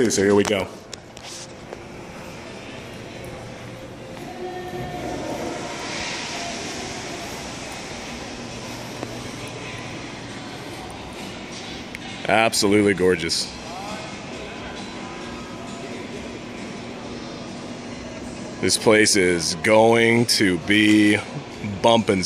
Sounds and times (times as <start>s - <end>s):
Music: 0.1s - 22.2s
Speech: 12.2s - 14.1s, 18.6s - 22.2s.